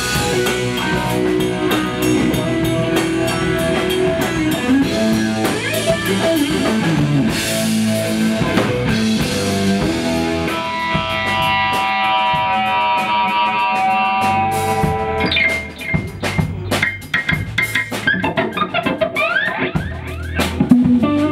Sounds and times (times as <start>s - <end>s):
Blues: 0.0s - 21.3s
Drum: 0.0s - 21.3s
Guitar: 0.0s - 21.3s.